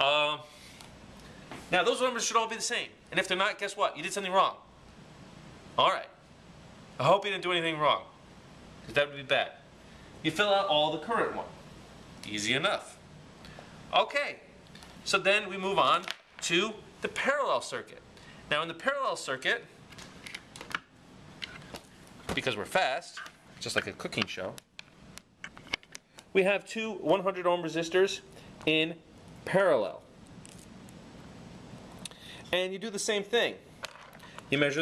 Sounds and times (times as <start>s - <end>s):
Speech: 0.0s - 0.5s, 1.7s - 4.6s, 5.8s - 6.2s, 7.0s - 8.1s, 8.9s - 9.6s, 10.2s - 11.6s, 12.2s - 13.0s, 13.9s - 19.7s, 22.3s - 24.6s, 26.4s - 30.1s, 32.5s - 33.6s, 34.5s - 34.8s.